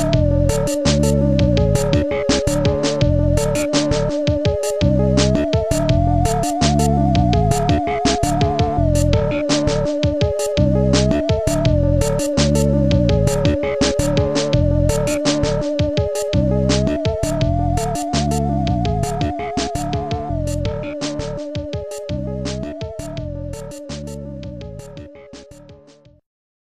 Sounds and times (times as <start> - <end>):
Funny music: 0.0 - 26.2.